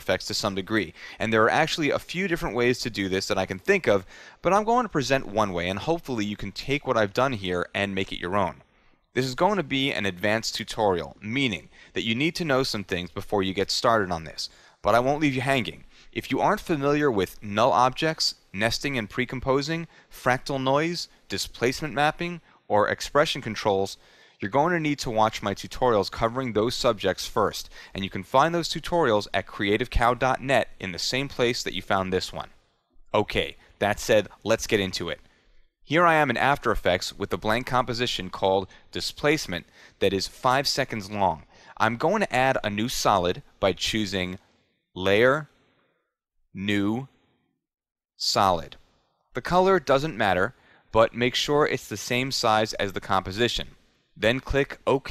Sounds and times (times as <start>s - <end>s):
Speech: 0.0s - 8.6s, 9.2s - 35.2s, 35.9s - 44.4s, 45.0s - 45.5s, 46.6s - 47.1s, 48.2s - 48.8s, 49.4s - 55.1s.